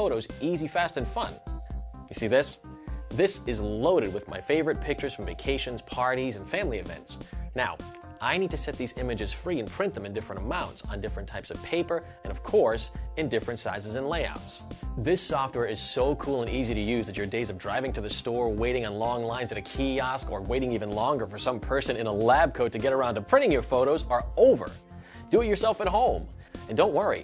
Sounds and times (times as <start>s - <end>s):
Speech: 0.0s - 1.4s, 2.1s - 2.6s, 3.2s - 27.2s
Music: 0.0s - 27.2s.